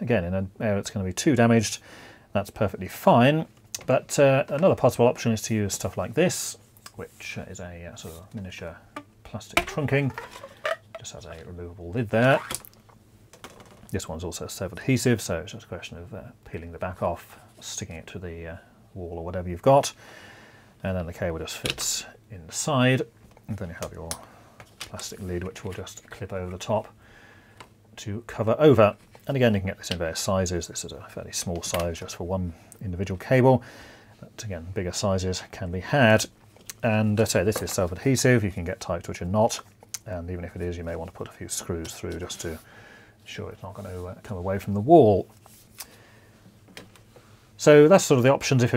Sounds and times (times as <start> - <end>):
Speech: 0.0 - 10.2, 11.0 - 12.5, 13.9 - 20.0, 20.8 - 24.3, 24.9 - 27.0, 28.0 - 33.6, 34.2 - 42.6, 43.3 - 45.3, 47.6 - 48.7.